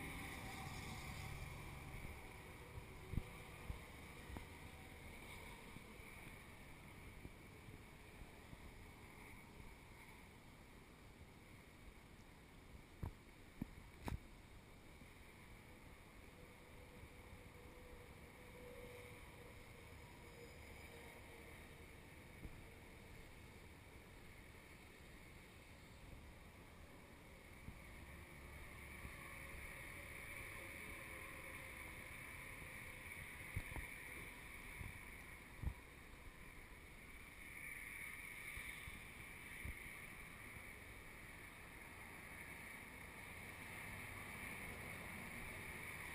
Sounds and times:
Vehicle: 0.0s - 46.1s.

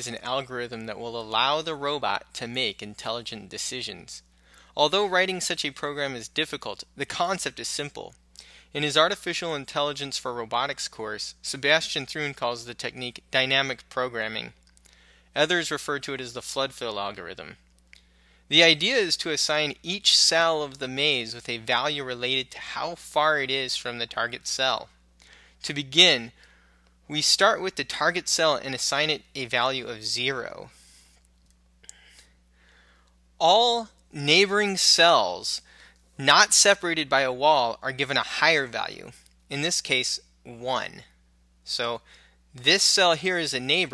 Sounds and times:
Speech: 0.0s - 14.6s, 15.4s - 17.6s, 18.5s - 25.0s, 25.6s - 26.4s, 27.1s - 30.8s, 33.4s - 42.0s, 42.6s - 43.9s.

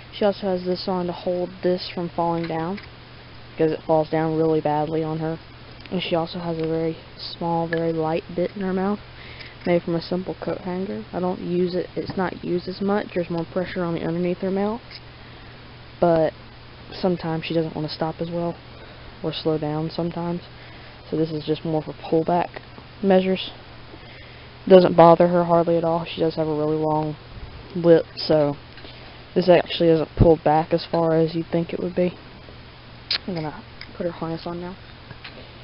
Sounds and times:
Speech: 0.1s - 2.8s, 3.6s - 9.0s, 9.7s - 14.8s, 16.0s - 18.6s, 19.2s - 20.5s, 21.1s - 23.6s, 24.7s - 28.6s, 29.4s - 32.2s, 33.1s - 34.8s.

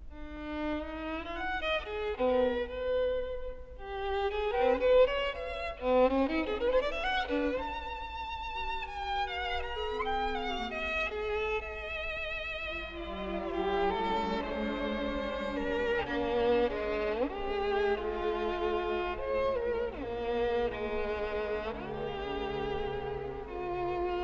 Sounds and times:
Violin, fiddle: 0.0s - 24.2s.

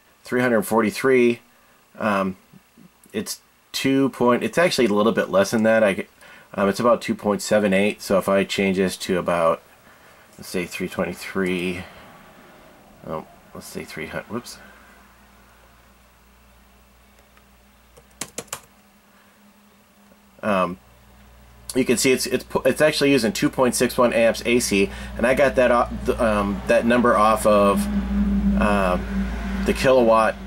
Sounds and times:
Speech: 0.2s - 1.4s, 2.0s - 2.4s, 3.1s - 9.6s, 10.4s - 11.9s, 13.0s - 14.7s, 20.4s - 20.8s, 21.7s - 27.9s, 28.6s - 30.4s
Computer keyboard: 18.0s - 18.7s.

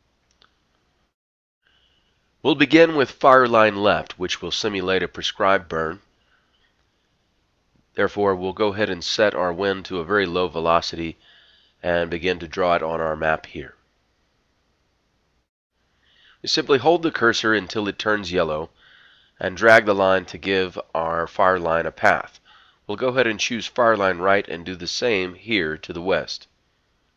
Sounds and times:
Speech: 2.4s - 6.0s, 8.0s - 11.2s, 11.8s - 13.8s, 16.4s - 18.7s, 19.4s - 26.5s.

